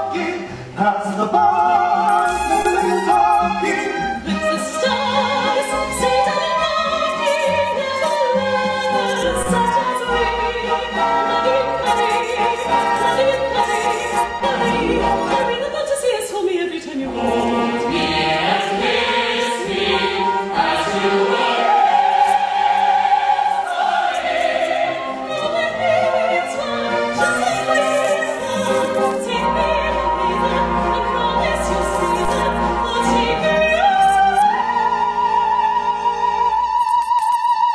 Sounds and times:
Opera: 0.0 - 37.7.

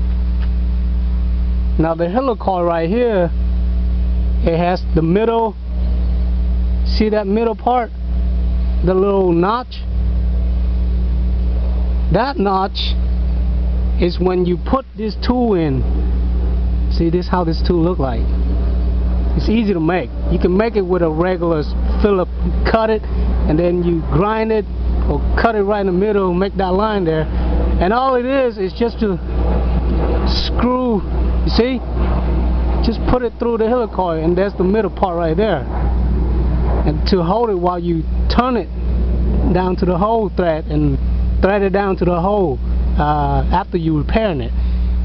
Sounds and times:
Engine: 0.0 - 45.0
Speech: 1.8 - 3.4, 4.4 - 5.6, 6.9 - 7.9, 8.8 - 9.9, 12.1 - 13.0, 14.0 - 15.8, 16.9 - 18.2, 19.4 - 29.2, 30.3 - 31.8, 32.8 - 35.7, 36.8 - 38.7, 39.5 - 44.6.

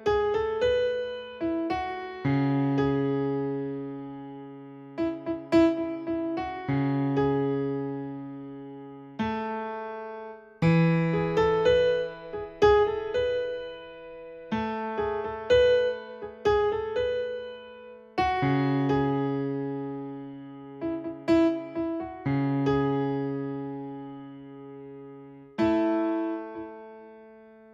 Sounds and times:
Electric piano: 0.0 - 27.7.

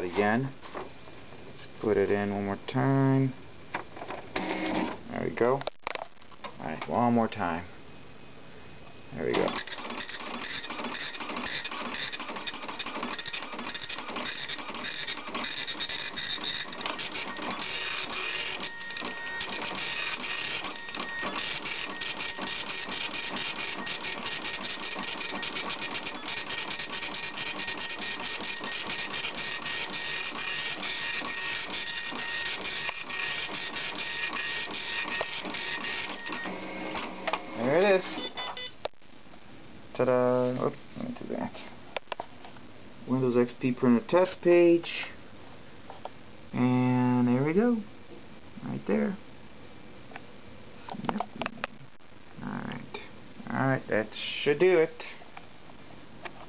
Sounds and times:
Speech: 0.0 - 0.6, 1.6 - 3.4, 5.1 - 5.7, 6.6 - 7.7, 9.1 - 9.6, 37.6 - 38.2, 40.0 - 41.8, 43.1 - 45.2, 48.6 - 49.2, 52.4 - 55.2
Printer: 4.4 - 5.0, 9.4 - 37.7.

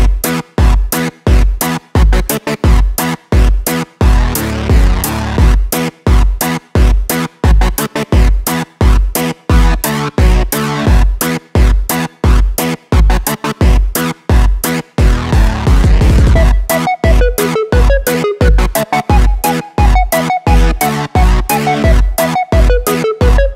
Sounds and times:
Music: 0.0 - 23.5.

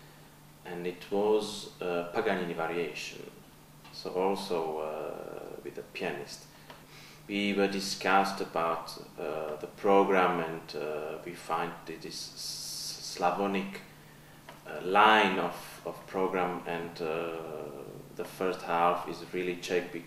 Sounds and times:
Speech: 0.7 - 6.5, 7.3 - 13.9, 14.6 - 20.0.

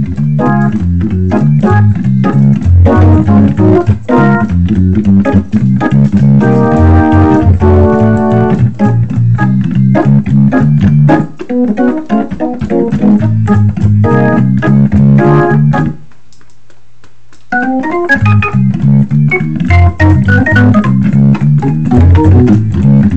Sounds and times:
Hammond organ: 0.0 - 16.1, 17.5 - 23.1.

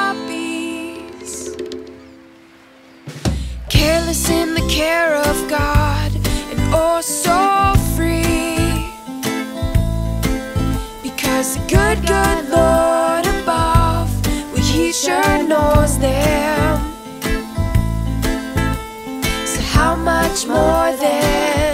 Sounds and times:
Music: 0.0 - 21.7.

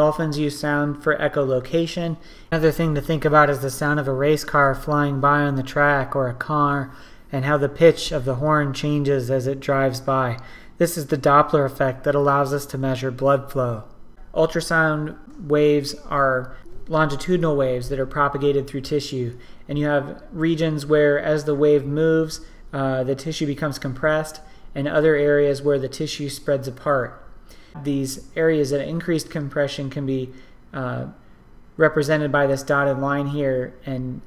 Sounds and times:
Speech: 0.0 - 27.2, 27.8 - 31.2, 31.8 - 34.2.

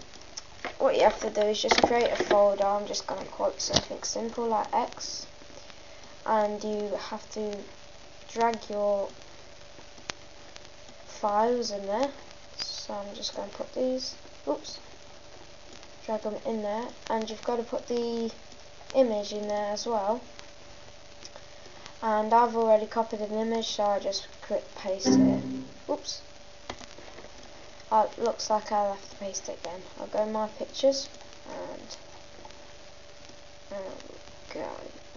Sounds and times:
Speech: 0.8 - 5.3, 6.2 - 7.7, 8.3 - 9.2, 11.1 - 14.9, 16.0 - 20.3, 22.0 - 26.3, 27.9 - 32.0, 33.7 - 35.0.

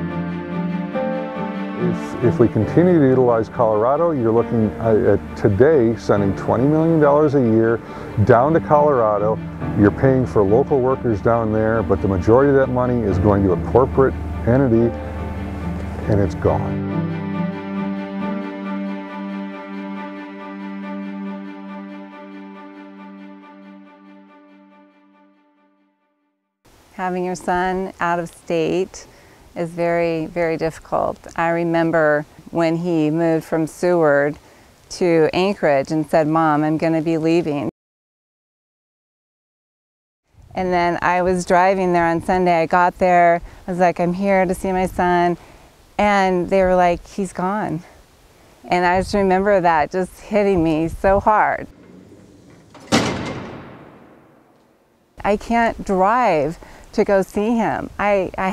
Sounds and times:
Music: 0.0 - 26.6
Speech: 1.8 - 15.0, 16.0 - 16.8, 27.0 - 37.7, 40.6 - 45.4, 46.0 - 48.0, 48.7 - 51.7, 55.2 - 58.5.

